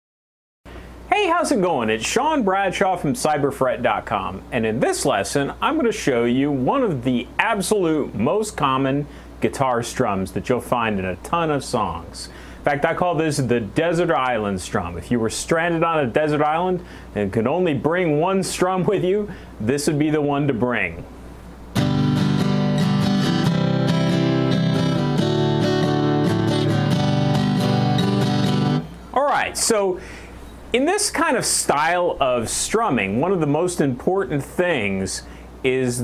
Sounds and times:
Speech: 1.1 - 21.1, 29.1 - 30.0, 30.7 - 36.0
Acoustic guitar: 21.6 - 30.5
Strum: 21.7 - 29.5.

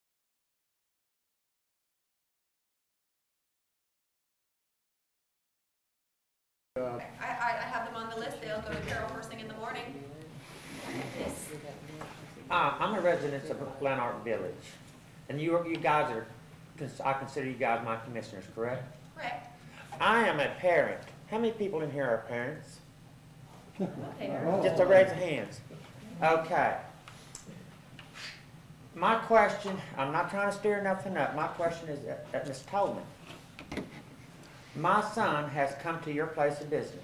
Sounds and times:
Speech: 6.8 - 10.3, 29.0 - 33.1.

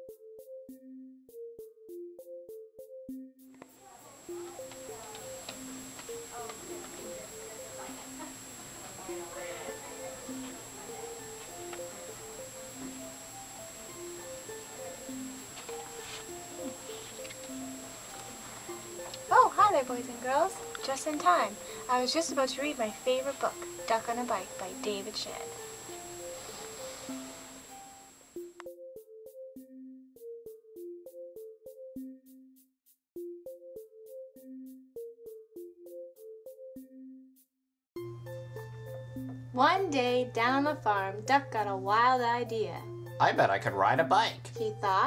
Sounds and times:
Music: 0.0 - 45.0.

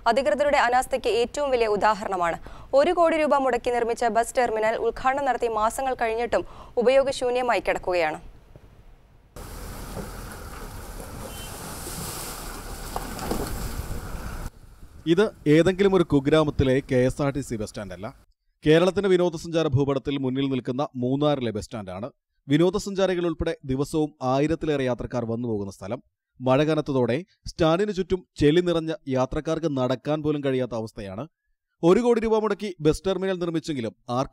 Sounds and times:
Speech: 15.1 - 34.3.

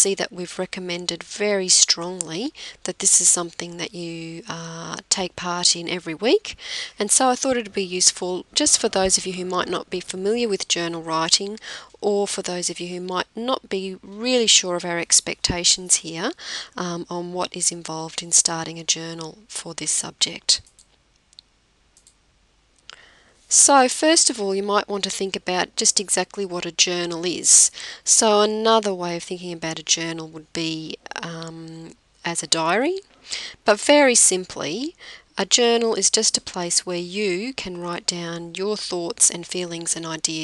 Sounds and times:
Speech: 0.0 - 20.7, 23.5 - 33.0, 33.6 - 40.4.

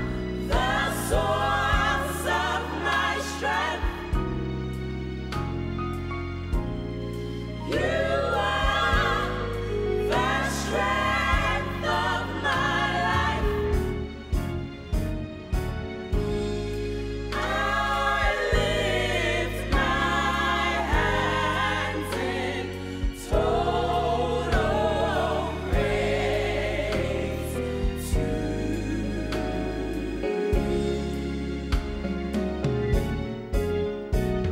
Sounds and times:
Choir: 0.0 - 33.5
Christmas music: 0.0 - 34.5
Gospel music: 0.0 - 34.5.

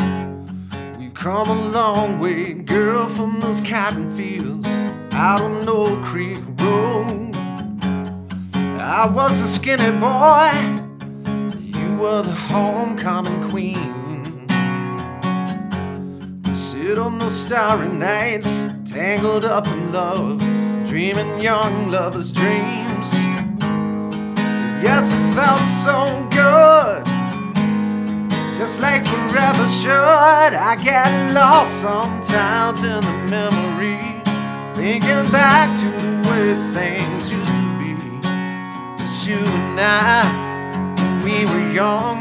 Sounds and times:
Acoustic guitar: 0.0 - 42.2.

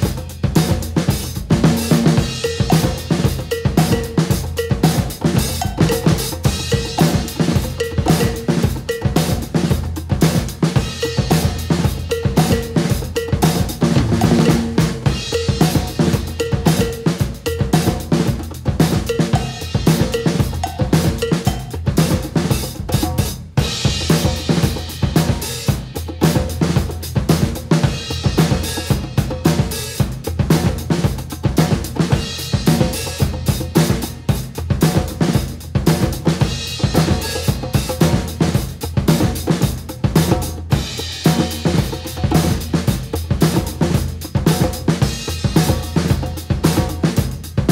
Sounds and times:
Drum: 0.0 - 47.7
Drum kit: 0.0 - 47.7.

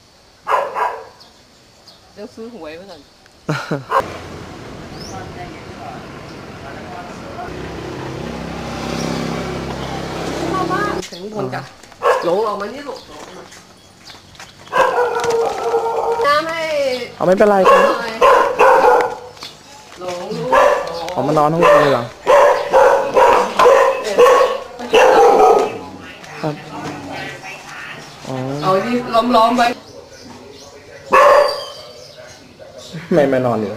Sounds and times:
Bark: 0.4 - 1.2, 12.0 - 12.4, 14.7 - 16.3, 17.6 - 19.3, 20.4 - 25.9, 31.1 - 32.0.

